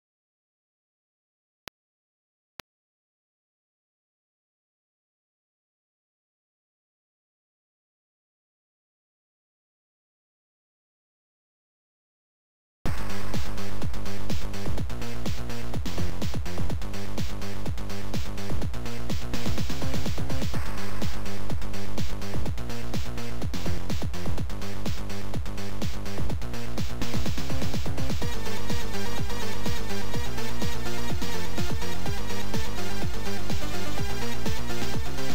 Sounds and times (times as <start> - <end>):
Disco: 12.9 - 35.3.